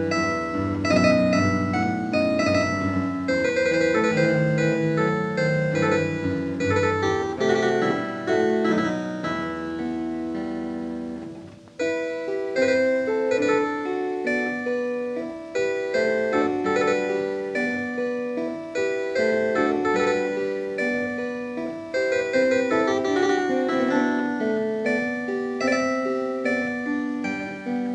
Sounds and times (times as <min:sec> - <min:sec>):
Harpsichord: 0:00.0 - 0:27.9.